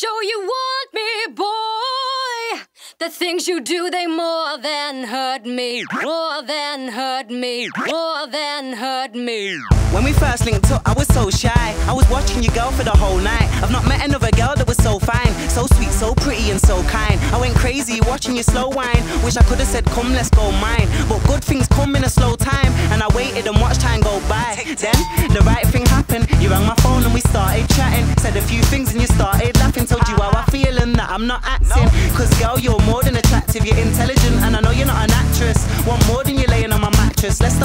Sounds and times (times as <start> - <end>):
Exciting music: 9.7 - 37.6.